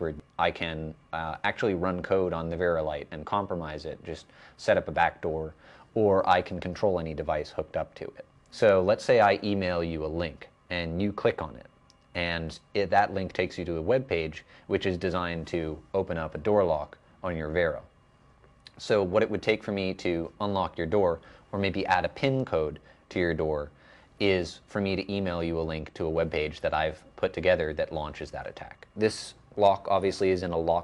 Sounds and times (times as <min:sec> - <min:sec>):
Speech: 0:00.0 - 0:17.9, 0:18.7 - 0:30.8.